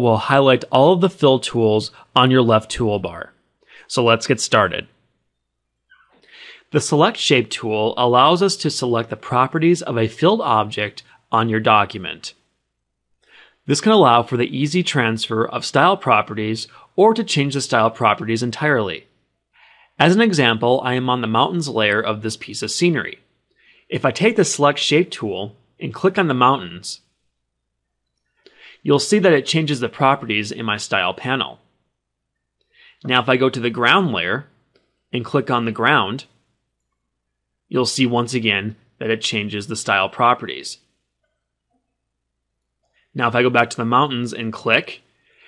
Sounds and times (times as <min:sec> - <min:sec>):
Speech: 0:00.0 - 0:05.0, 0:06.6 - 0:12.4, 0:13.6 - 0:19.1, 0:20.0 - 0:23.3, 0:23.9 - 0:27.1, 0:28.8 - 0:31.6, 0:33.0 - 0:34.5, 0:35.1 - 0:36.4, 0:37.7 - 0:40.9, 0:43.2 - 0:45.1.